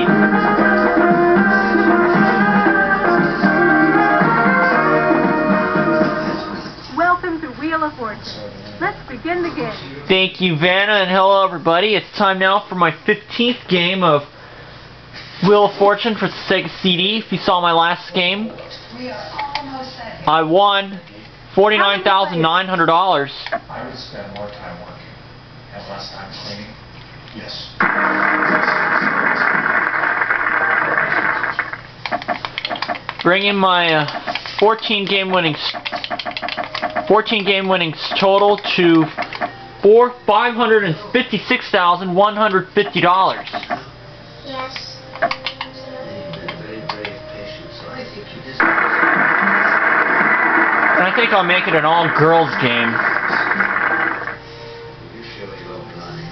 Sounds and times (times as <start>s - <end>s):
Music: 0.0s - 6.9s, 43.8s - 48.9s, 53.5s - 56.3s.